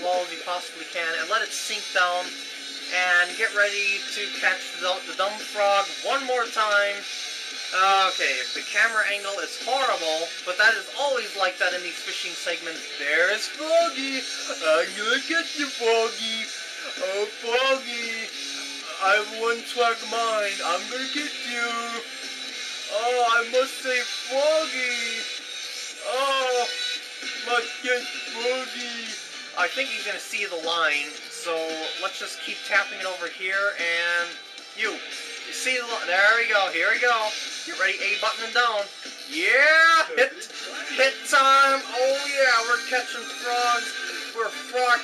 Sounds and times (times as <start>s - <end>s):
Speech: 0.0s - 2.3s, 2.9s - 7.0s, 7.7s - 18.3s, 18.9s - 22.0s, 22.9s - 25.3s, 26.0s - 26.7s, 27.4s - 45.0s
Music: 0.0s - 45.0s.